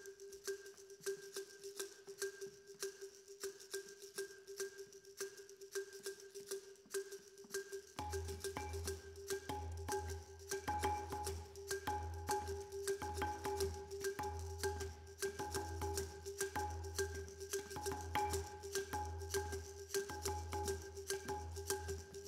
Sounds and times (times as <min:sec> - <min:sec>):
Percussion: 0:00.0 - 0:22.2.